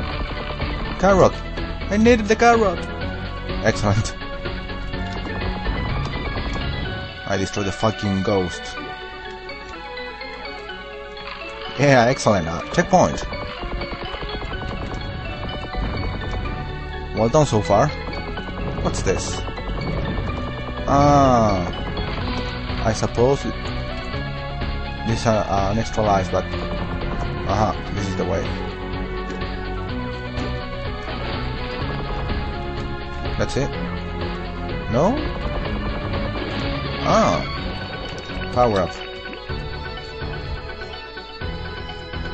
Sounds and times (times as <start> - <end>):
Music: 0.0 - 42.3
Speech: 1.0 - 2.8, 3.6 - 4.2, 7.3 - 8.8, 11.8 - 13.2, 17.2 - 18.0, 18.8 - 19.4, 20.9 - 21.8, 22.8 - 23.6, 25.1 - 26.5, 27.5 - 28.6, 33.4 - 33.7, 34.9 - 35.3, 37.0 - 37.5, 38.6 - 39.0.